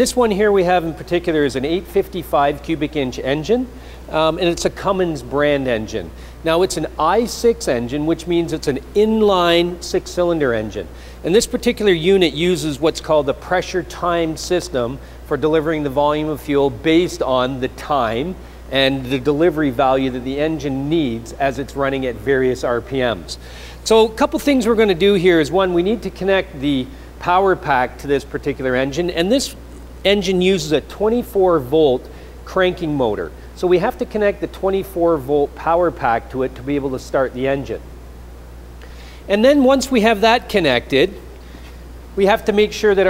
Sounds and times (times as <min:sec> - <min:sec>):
Speech: 0:00.0 - 0:37.8, 0:39.3 - 0:41.2, 0:42.2 - 0:43.1.